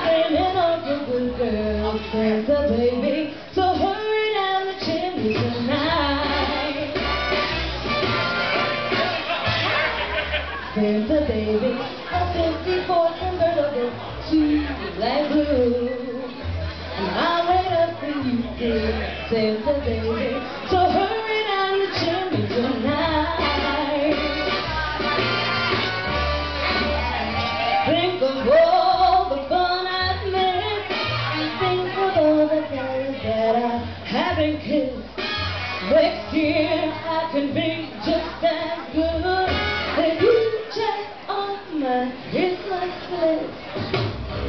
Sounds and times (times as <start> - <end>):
Female singing: 0.0 - 7.2, 10.7 - 25.7, 26.7 - 35.2, 35.8 - 43.7
Music: 0.0 - 44.4.